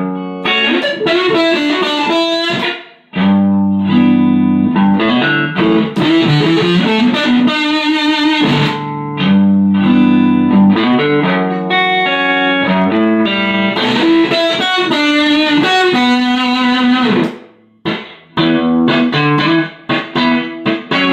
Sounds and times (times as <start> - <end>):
Electric guitar: 0.0 - 21.1
Rock music: 0.0 - 21.1.